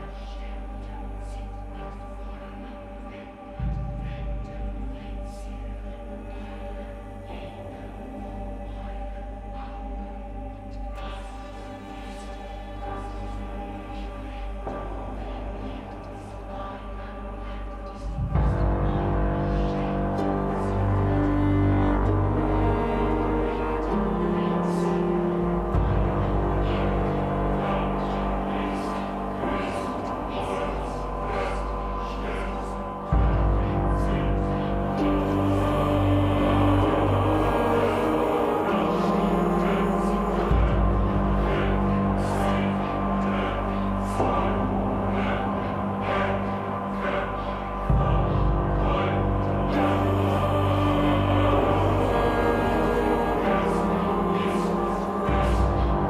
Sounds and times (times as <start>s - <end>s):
Music: 0.0s - 56.0s.